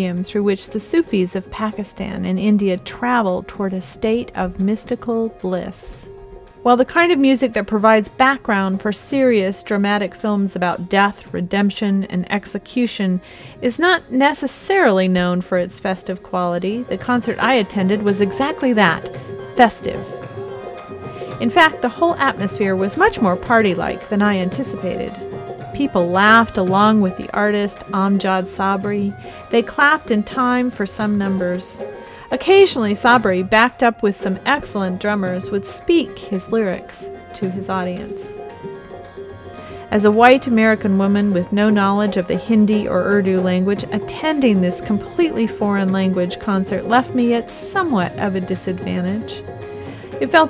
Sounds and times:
Speech: 0:00.0 - 0:06.1, 0:06.7 - 0:20.1, 0:21.4 - 0:25.2, 0:25.8 - 0:38.4, 0:39.9 - 0:49.4, 0:50.2 - 0:50.5
Background music: 0:00.0 - 0:50.5.

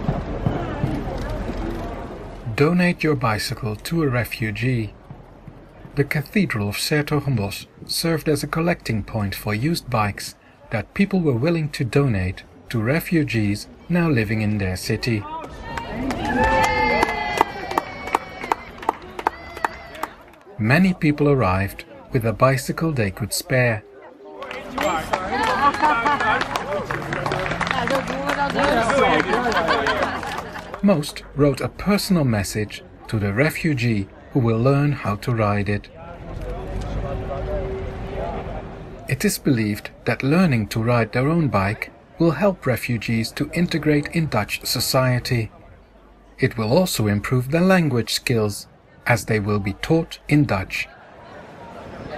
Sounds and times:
Speech: 0:02.5 - 0:05.0, 0:06.0 - 0:15.8, 0:20.5 - 0:25.8, 0:30.8 - 0:45.6, 0:46.4 - 0:51.0.

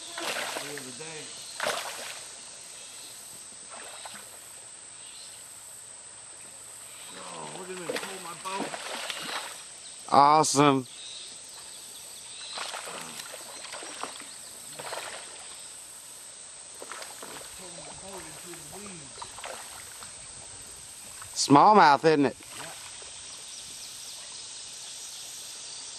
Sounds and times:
Boat, Water vehicle: 0:06.3 - 0:09.7, 0:16.8 - 0:25.0
Speech: 0:07.1 - 0:08.8, 0:17.6 - 0:19.2, 0:21.4 - 0:22.8.

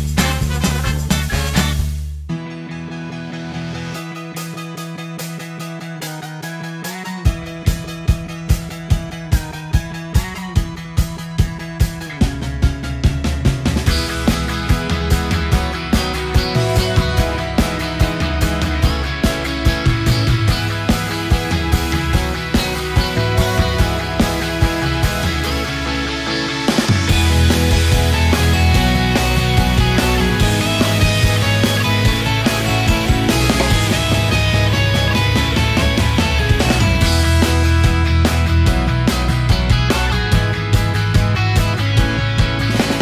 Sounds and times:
Music: 0:00.0 - 0:43.0.

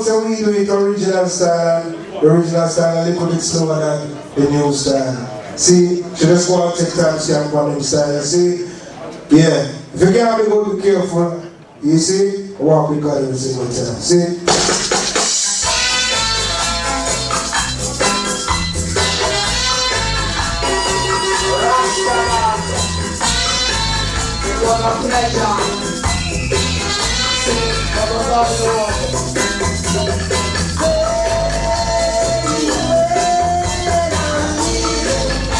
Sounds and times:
Music: 0:14.5 - 0:35.5.

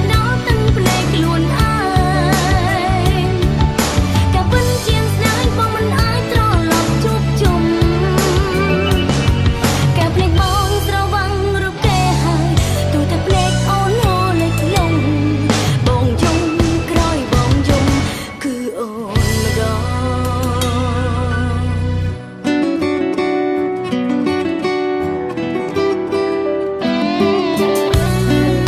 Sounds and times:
Music: 0:00.0 - 0:28.6.

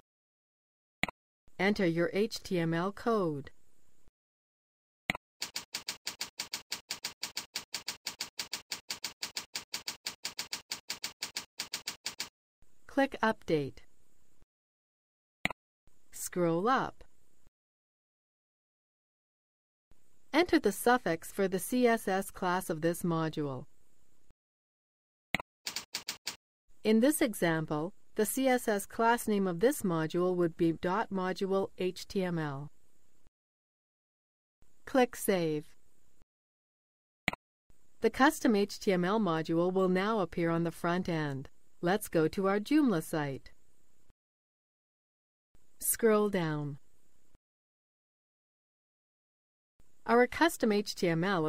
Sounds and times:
Speech: 0:01.6 - 0:03.5, 0:12.9 - 0:13.8, 0:16.2 - 0:17.0, 0:20.4 - 0:23.7, 0:26.9 - 0:32.7, 0:34.9 - 0:35.7, 0:38.0 - 0:43.5, 0:45.8 - 0:46.8, 0:50.1 - 0:51.4.

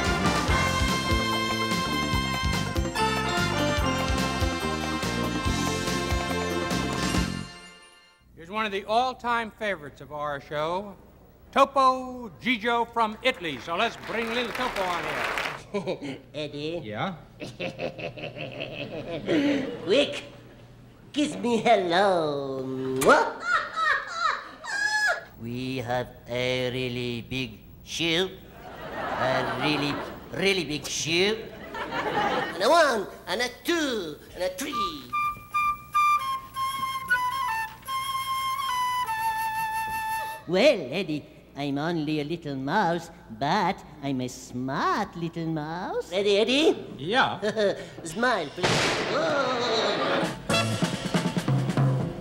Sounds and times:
Speech: 0:08.4 - 0:11.0, 0:21.1 - 0:23.2, 0:25.4 - 0:28.4, 0:29.2 - 0:31.5, 0:32.5 - 0:35.2, 0:40.5 - 0:50.0
Inside, large room or hall: 0:17.5 - 0:25.4, 0:27.1 - 0:32.6, 0:34.6 - 0:40.5, 0:47.8 - 0:52.2.

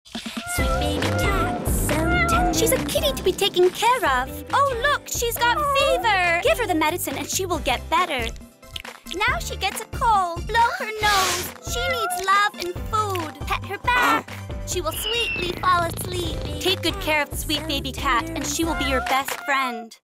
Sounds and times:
Music: 0:00.1 - 0:20.0
Speech: 0:02.5 - 0:08.3, 0:09.2 - 0:20.0.

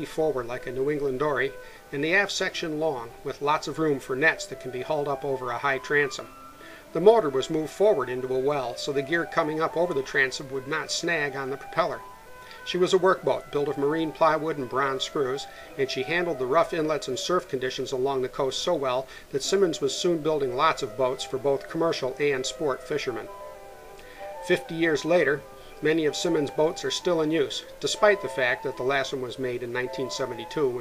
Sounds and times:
Speech: 0:00.0 - 0:06.2, 0:07.0 - 0:12.0, 0:12.7 - 0:23.3, 0:24.4 - 0:30.8
Music: 0:00.0 - 0:30.8.

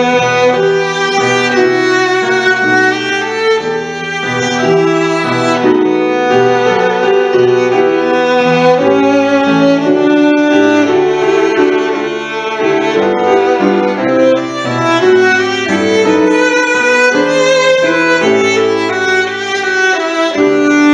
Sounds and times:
Violin, fiddle: 0:00.0 - 0:20.9.

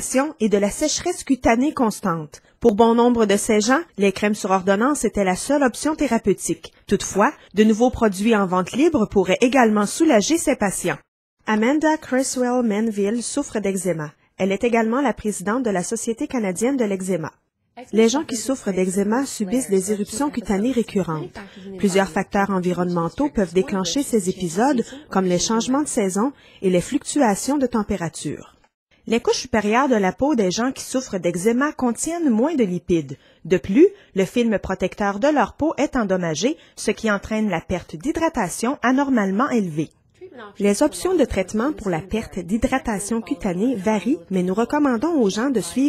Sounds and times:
Speech: 0:00.0 - 0:45.8.

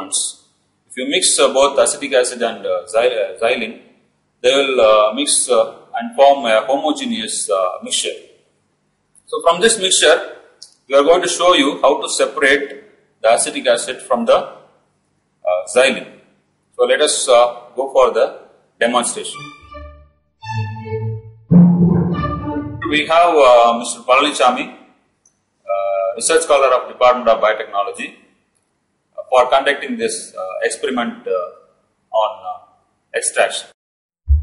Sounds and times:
Speech: 0:00.0 - 0:00.4, 0:01.0 - 0:08.2, 0:09.3 - 0:14.6, 0:15.5 - 0:16.2, 0:16.8 - 0:19.4, 0:22.8 - 0:24.8, 0:25.7 - 0:28.2, 0:29.2 - 0:31.6, 0:32.2 - 0:32.6, 0:33.2 - 0:33.8.

